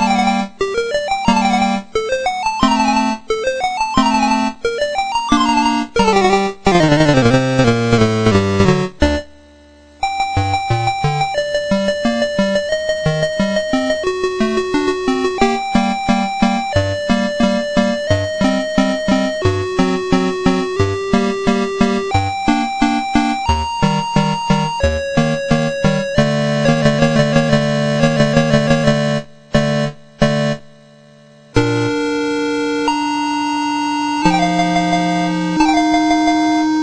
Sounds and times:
Music: 0.0 - 36.8.

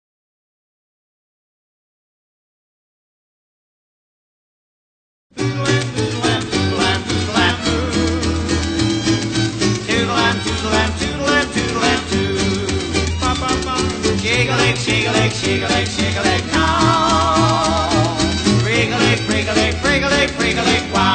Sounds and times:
Music: 5.3 - 21.1.

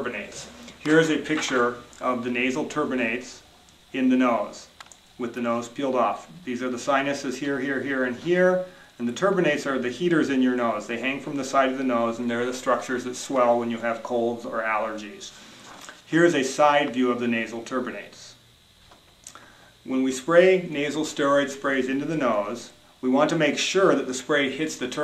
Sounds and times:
Speech: 0.0 - 15.4, 16.1 - 18.4, 19.8 - 25.0.

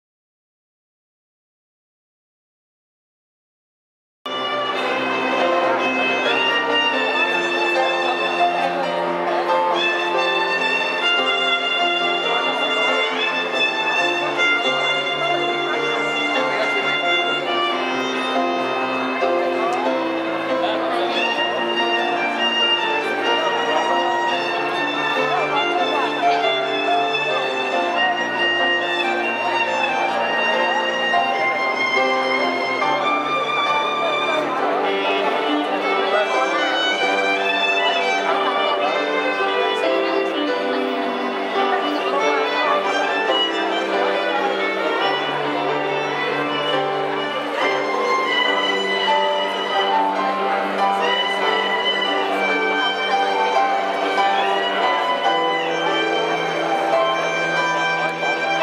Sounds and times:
Speech: 4.3 - 58.6
Violin, fiddle: 4.3 - 58.6.

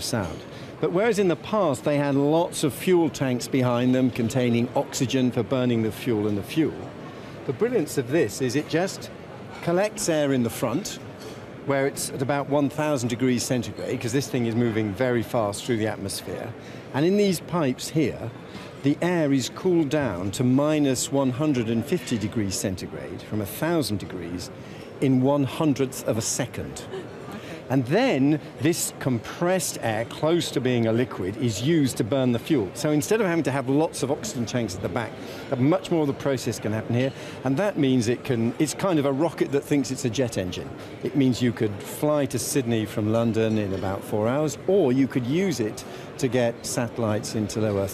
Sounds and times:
Speech: 0.0 - 6.9, 7.5 - 11.0, 11.6 - 27.0, 27.7 - 47.9.

